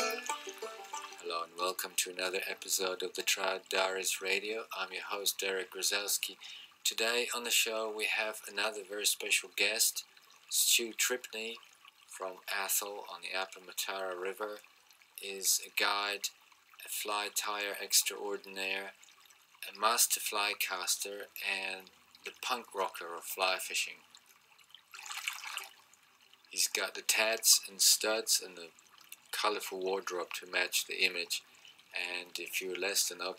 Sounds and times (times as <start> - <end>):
Speech: 1.2 - 11.6, 12.2 - 14.6, 15.2 - 19.0, 19.6 - 24.0, 26.6 - 31.4, 32.0 - 33.3.